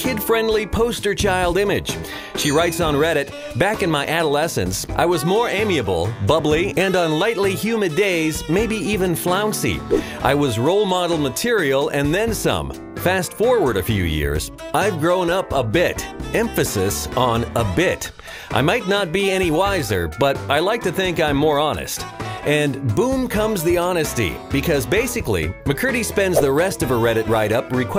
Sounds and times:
Music: 0.0s - 27.9s
Speech: 0.0s - 27.9s.

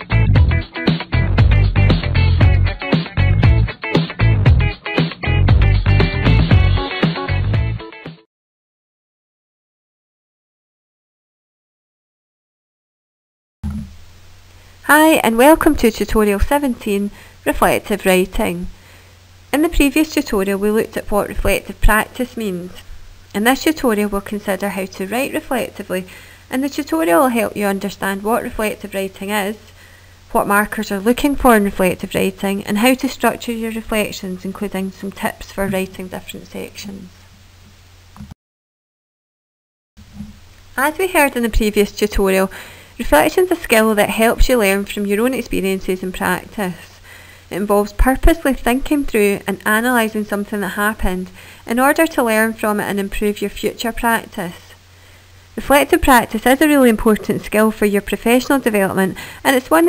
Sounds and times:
Speech: 14.9s - 18.7s, 19.5s - 29.7s, 30.3s - 37.2s, 40.8s - 54.8s, 55.6s - 59.8s.

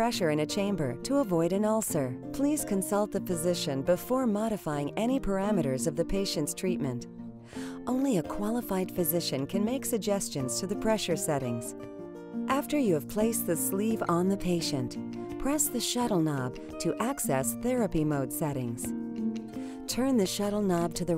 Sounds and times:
Speech: 0.0s - 7.0s, 7.9s - 11.7s, 12.5s - 18.9s, 19.9s - 21.1s
Music: 0.0s - 21.1s.

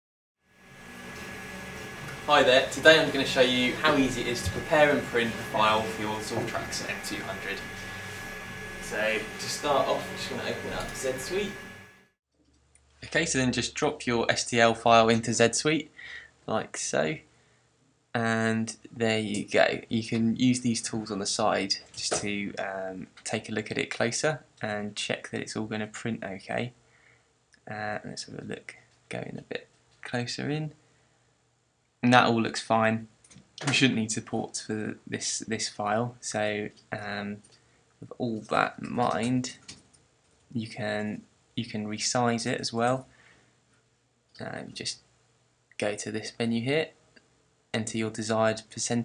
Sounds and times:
Speech: 2.3s - 7.9s, 8.8s - 11.6s, 13.0s - 17.2s, 18.2s - 26.8s, 27.7s - 30.8s, 32.0s - 37.4s, 38.0s - 39.6s, 40.5s - 43.1s, 44.4s - 45.0s, 45.8s - 47.0s, 47.8s - 49.0s.

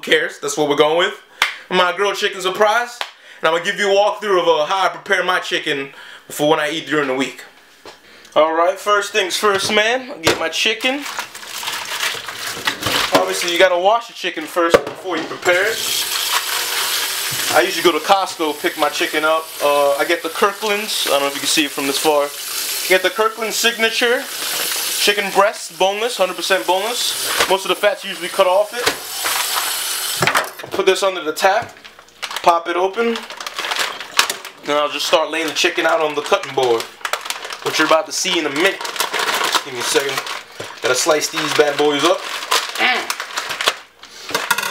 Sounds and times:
Speech: 0.0s - 7.6s, 8.4s - 11.1s, 13.1s - 15.8s, 17.5s - 24.3s, 25.0s - 29.0s, 30.7s - 31.8s, 32.4s - 33.3s, 34.6s - 36.9s, 37.6s - 38.8s, 39.6s - 43.2s.

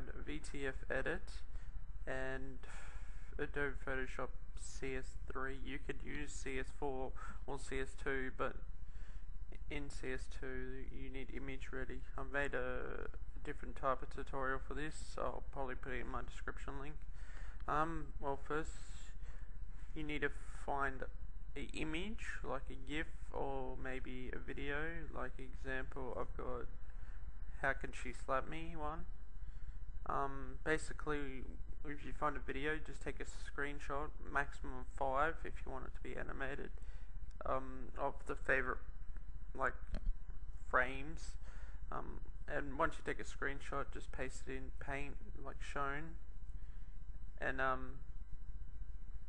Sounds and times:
Speech: 0.0s - 8.7s, 9.5s - 26.8s, 27.4s - 29.2s, 30.0s - 46.4s, 47.3s - 48.1s.

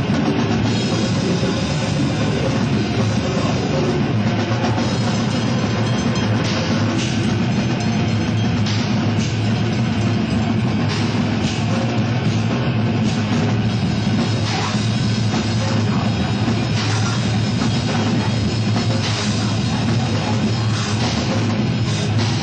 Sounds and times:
Music: 0.0s - 22.4s.

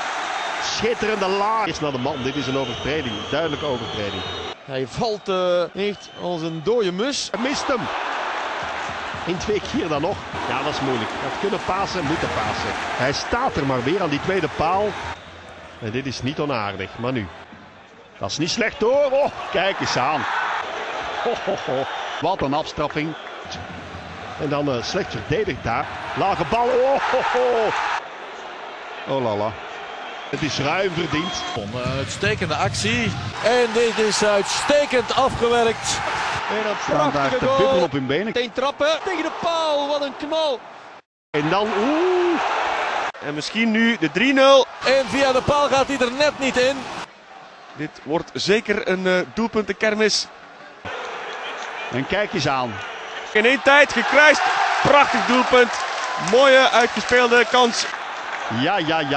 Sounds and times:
Speech: 0.6s - 7.9s, 9.3s - 15.0s, 15.8s - 17.3s, 18.2s - 20.3s, 21.2s - 23.2s, 24.4s - 27.7s, 29.1s - 29.6s, 30.4s - 40.6s, 41.4s - 42.3s, 43.2s - 46.8s, 47.8s - 50.3s, 51.9s - 52.8s, 53.4s - 57.9s, 58.5s - 59.1s.

